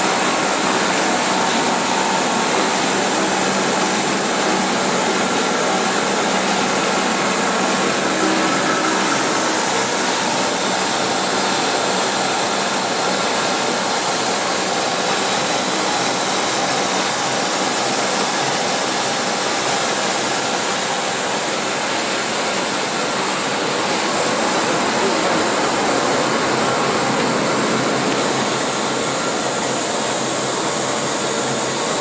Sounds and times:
Inside, large room or hall: 0:00.0 - 0:32.0.

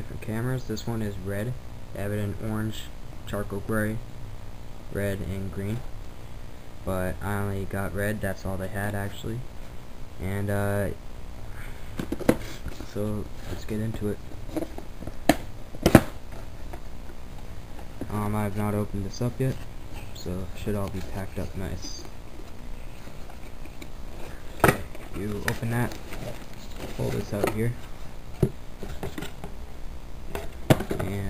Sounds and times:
Speech: 0:00.0 - 0:04.0, 0:04.9 - 0:05.9, 0:06.8 - 0:09.5, 0:10.2 - 0:11.0, 0:12.8 - 0:14.2, 0:18.0 - 0:22.1, 0:24.7 - 0:26.0, 0:26.6 - 0:27.8, 0:30.9 - 0:31.2.

